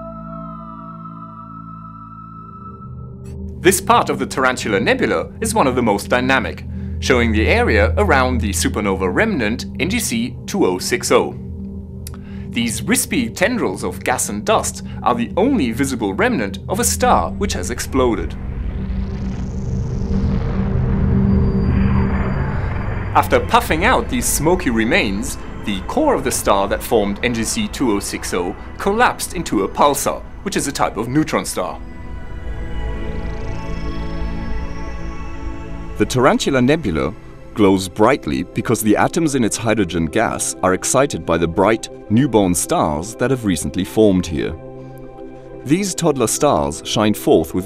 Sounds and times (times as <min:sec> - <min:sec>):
Music: 0:00.0 - 0:47.6
Speech: 0:03.6 - 0:11.4, 0:12.6 - 0:18.4, 0:23.2 - 0:31.8, 0:36.0 - 0:44.6, 0:45.7 - 0:47.6.